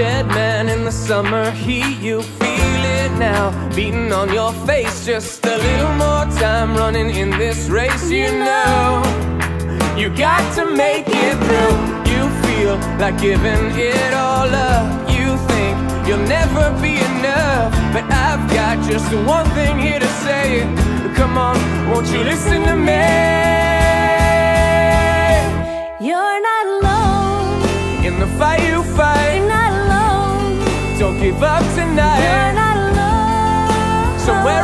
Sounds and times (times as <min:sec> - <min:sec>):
Happy music: 0:00.0 - 0:34.6
Soundtrack music: 0:05.8 - 0:34.6.